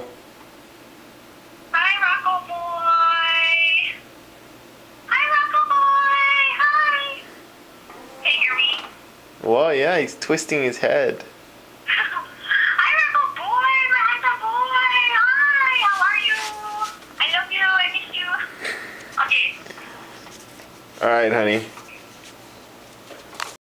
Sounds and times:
Speech: 8.3s - 11.3s, 11.9s - 18.4s, 21.0s - 21.8s.

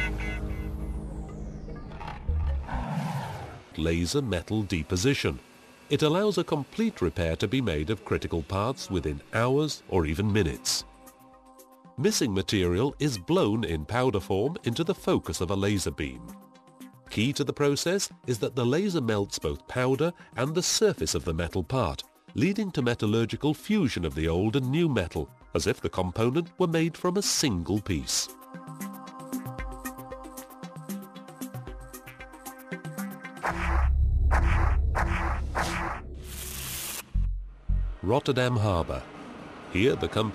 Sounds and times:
Music: 0.0s - 39.0s
Speech: 3.8s - 10.9s, 12.0s - 16.3s, 17.1s - 28.4s, 38.0s - 39.1s, 39.7s - 40.3s.

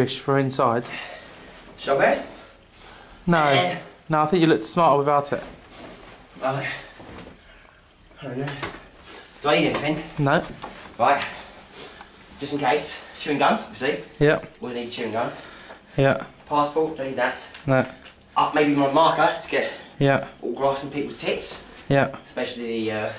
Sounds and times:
Speech: 3.3s - 5.5s, 16.0s - 23.1s.

